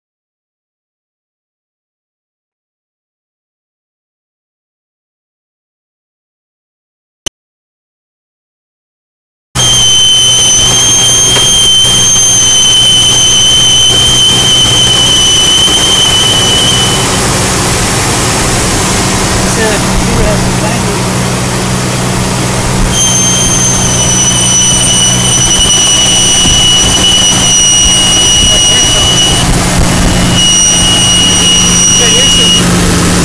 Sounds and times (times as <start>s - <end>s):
Speech: 19.5s - 21.2s, 28.4s - 29.4s, 31.9s - 32.7s.